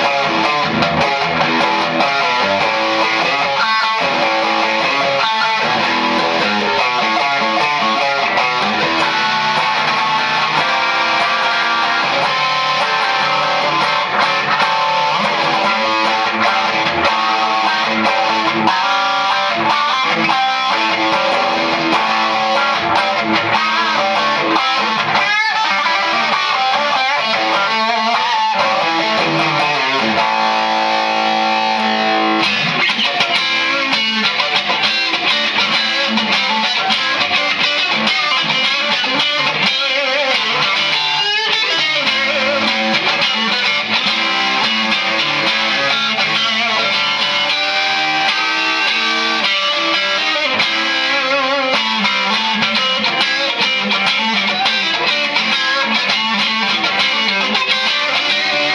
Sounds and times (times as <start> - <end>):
Bass guitar: 0.0 - 58.7.